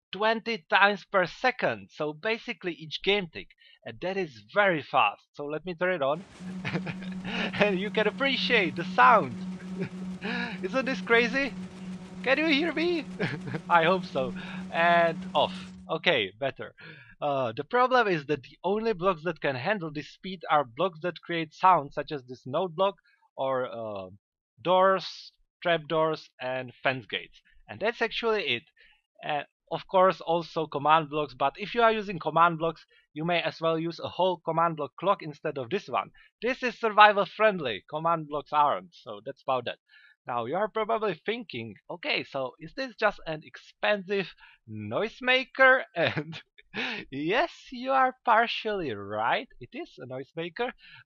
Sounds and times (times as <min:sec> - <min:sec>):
Speech: 0:00.0 - 0:11.5, 0:12.3 - 0:28.6, 0:29.2 - 0:51.0.